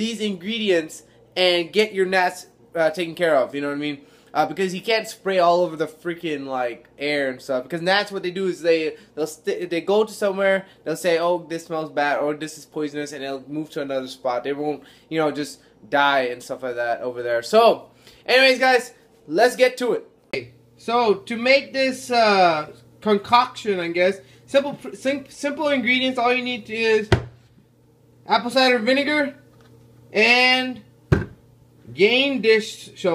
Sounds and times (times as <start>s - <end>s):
Speech: 0.0s - 27.2s, 28.3s - 29.4s, 30.1s - 30.9s, 31.9s - 33.1s.